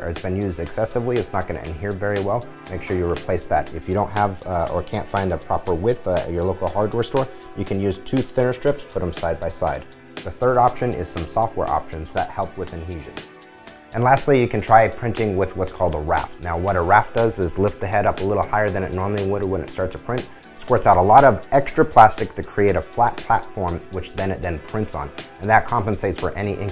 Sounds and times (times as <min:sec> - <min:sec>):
Speech: 0:00.0 - 0:13.2, 0:14.0 - 0:26.7
Music: 0:00.0 - 0:26.7.